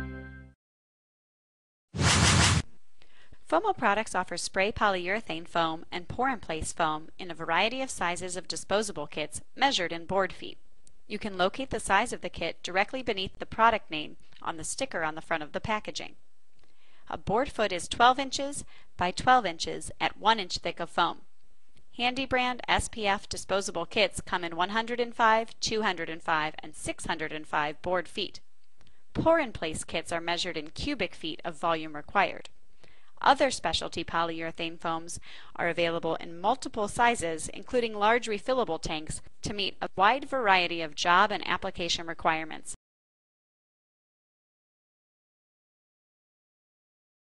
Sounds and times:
Speech: 3.4s - 16.2s, 17.1s - 21.3s, 22.0s - 28.4s, 29.2s - 32.5s, 33.2s - 42.8s.

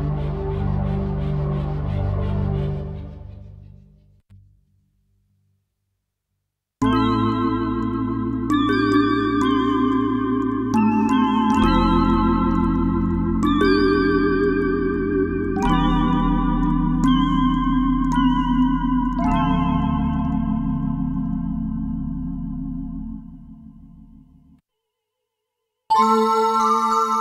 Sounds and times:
Piano: 0.0s - 4.0s, 6.8s - 24.6s.

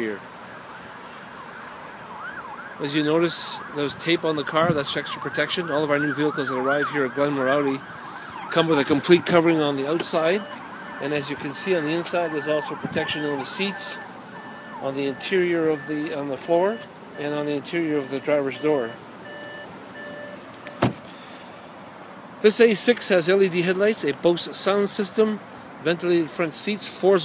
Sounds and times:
Speech: 0.0s - 0.2s, 2.8s - 7.8s, 8.5s - 14.0s, 14.8s - 19.0s, 22.4s - 27.2s
Door: 20.7s - 21.1s.

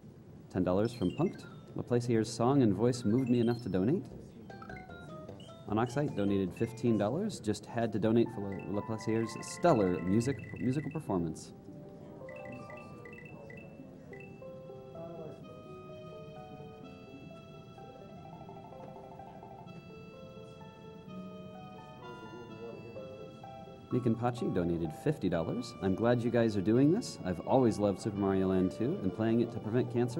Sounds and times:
Music: 0.0s - 30.1s
Speech: 0.5s - 4.4s, 5.7s - 14.2s, 15.0s - 15.6s, 22.0s - 30.1s.

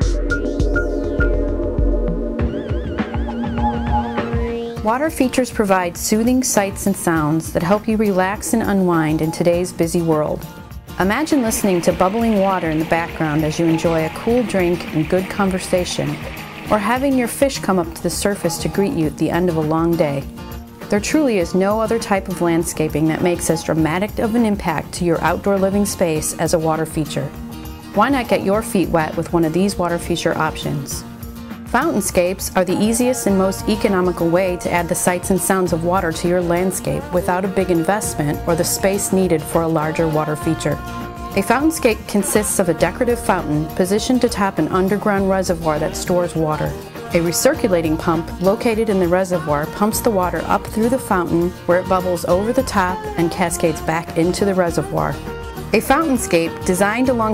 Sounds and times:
Music: 0.0s - 57.3s
Speech: 4.8s - 10.4s, 11.0s - 20.3s, 20.9s - 27.3s, 28.0s - 31.0s, 31.7s - 40.8s, 41.4s - 55.2s, 55.8s - 57.3s.

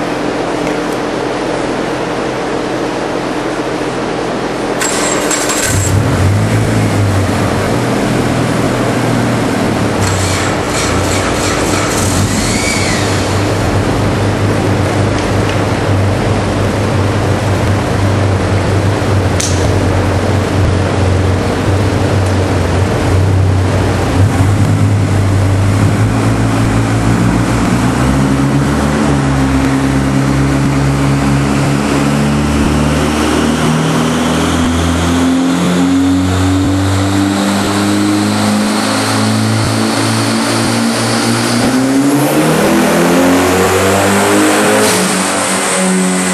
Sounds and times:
Car: 0.0s - 46.3s
Accelerating, revving, vroom: 4.8s - 13.6s, 24.3s - 46.3s.

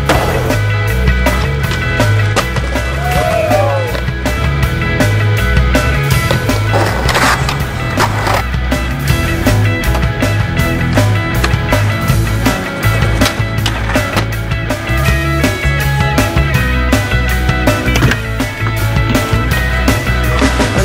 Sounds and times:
Skateboard: 0.0s - 4.1s, 5.8s - 8.5s, 12.4s - 14.8s, 17.6s - 20.8s
Music: 0.0s - 20.8s.

